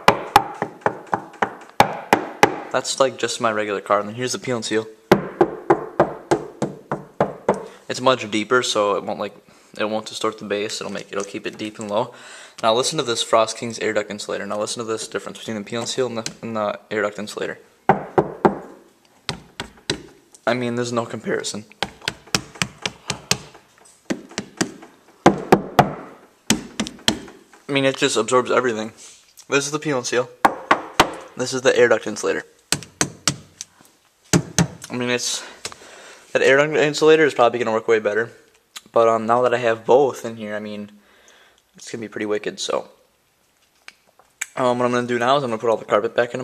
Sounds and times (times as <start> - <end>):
Speech: 2.7 - 5.0, 7.8 - 17.7, 20.4 - 21.7, 27.7 - 30.4, 31.3 - 32.6, 34.9 - 35.6, 36.3 - 41.0, 41.8 - 43.0, 44.4 - 46.4.